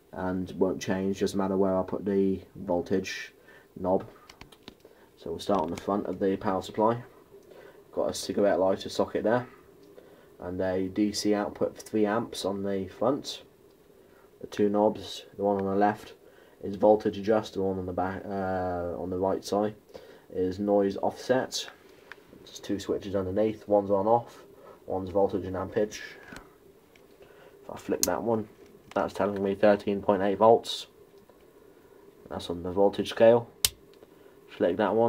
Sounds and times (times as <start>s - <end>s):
Speech: 0.1s - 4.2s, 5.2s - 7.1s, 7.9s - 9.6s, 10.4s - 13.5s, 14.4s - 21.8s, 22.4s - 26.4s, 27.7s - 31.0s, 32.3s - 33.6s, 34.5s - 35.0s.